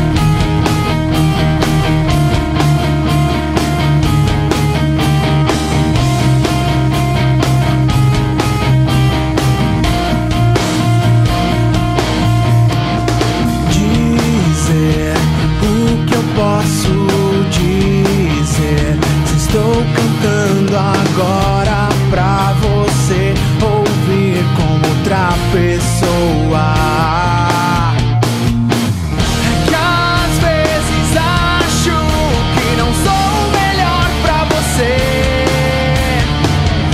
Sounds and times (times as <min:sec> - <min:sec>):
Rock music: 0:00.0 - 0:36.9.